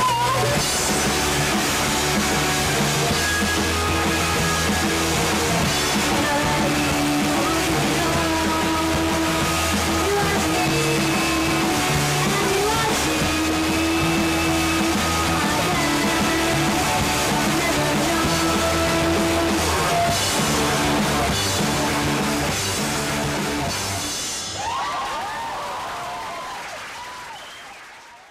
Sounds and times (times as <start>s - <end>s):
Singing: 5.7s - 22.7s.